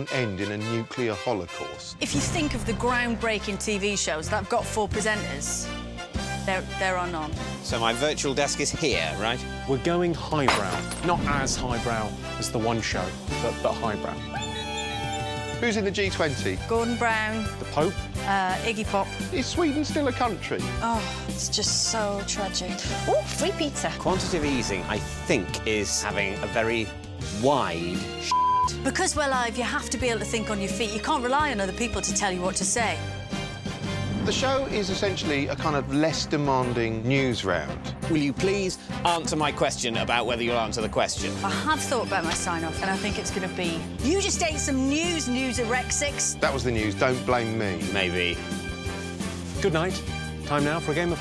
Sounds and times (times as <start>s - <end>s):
Music: 0.0s - 51.2s.